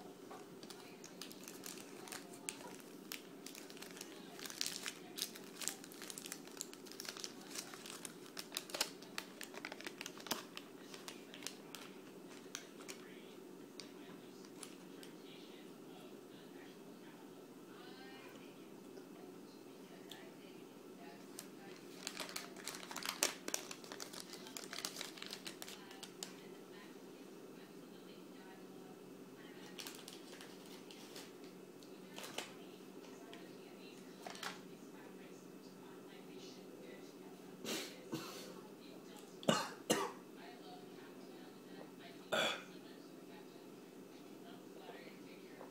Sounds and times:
Inside, small room: 0.0s - 45.7s
Crumpling, crinkling: 0.6s - 13.1s, 13.8s - 15.1s, 21.2s - 26.4s, 29.6s - 31.5s, 32.1s - 32.5s, 34.2s - 34.6s.

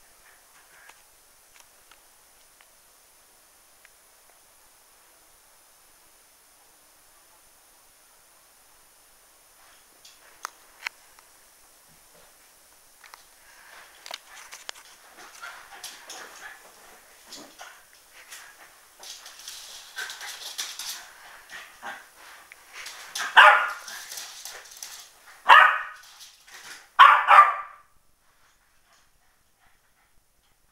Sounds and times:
Bark: 23.2s - 23.9s, 25.4s - 26.0s, 27.0s - 27.9s.

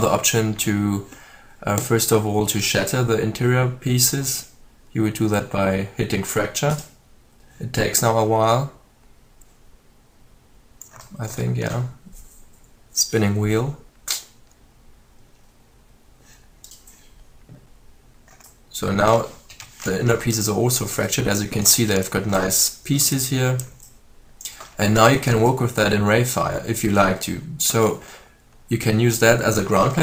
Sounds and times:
Speech: 0.0s - 6.9s, 7.6s - 8.8s, 11.1s - 12.1s, 13.0s - 13.8s, 18.7s - 23.7s, 24.8s - 28.0s, 28.7s - 30.0s.

